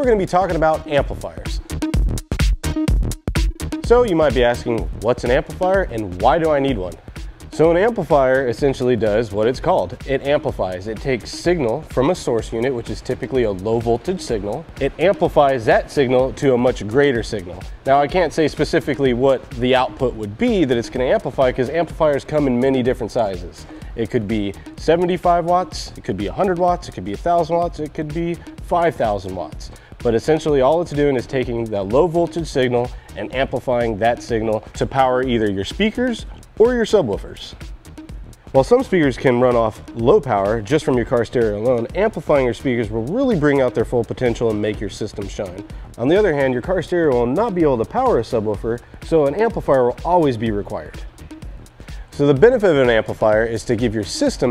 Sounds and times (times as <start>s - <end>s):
Speech: 0.0s - 1.6s, 3.9s - 37.6s, 38.6s - 51.0s, 52.2s - 54.5s
Music: 0.0s - 54.5s.